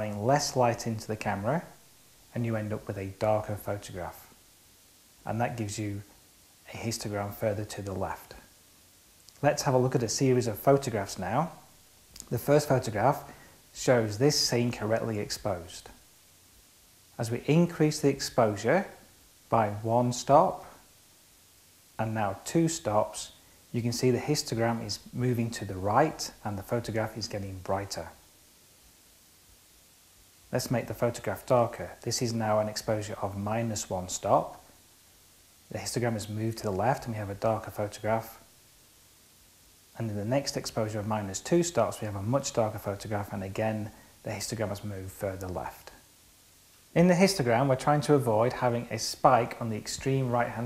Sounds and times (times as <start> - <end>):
Speech: 0.0 - 4.4, 5.2 - 8.6, 9.4 - 16.0, 17.2 - 20.8, 22.0 - 28.2, 30.5 - 34.7, 35.7 - 38.5, 40.0 - 46.1, 47.0 - 50.6
Inside, small room: 0.0 - 50.6.